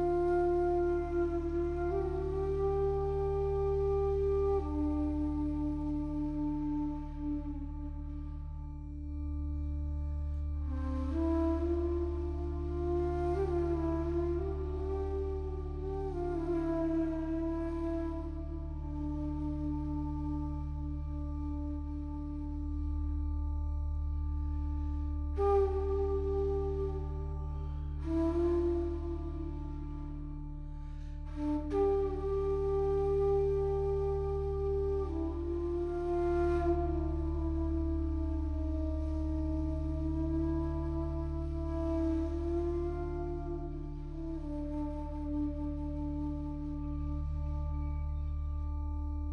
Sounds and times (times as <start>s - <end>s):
Flute: 0.0s - 49.3s.